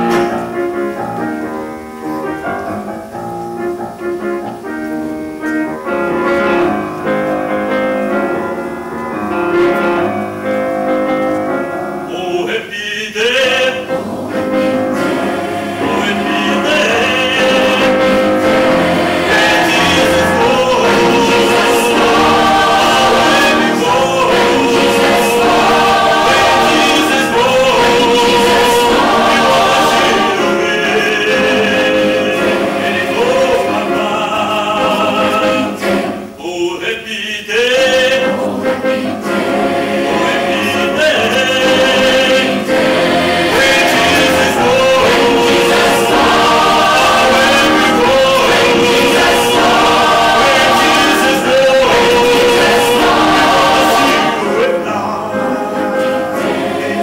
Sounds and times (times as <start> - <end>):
Music: 0.0 - 57.0.